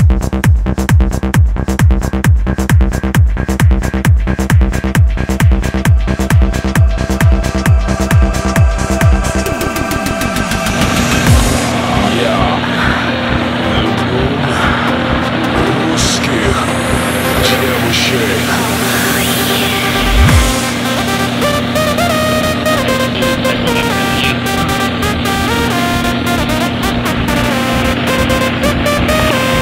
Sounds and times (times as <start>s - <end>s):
Techno: 0.0s - 29.6s.